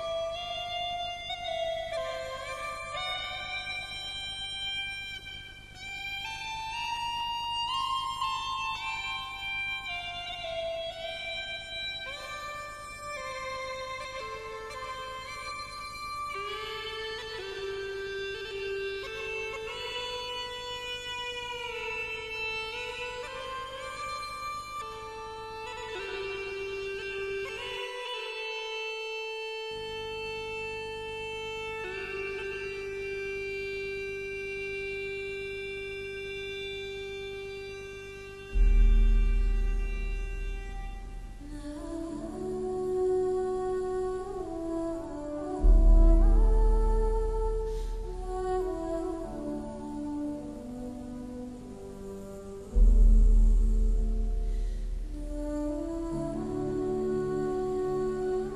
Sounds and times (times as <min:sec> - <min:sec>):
Music: 0:00.0 - 0:58.5.